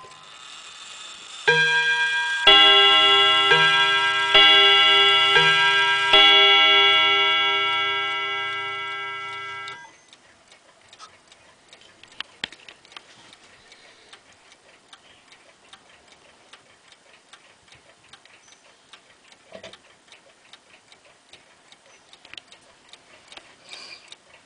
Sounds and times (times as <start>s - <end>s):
Tick-tock: 0.0s - 24.4s.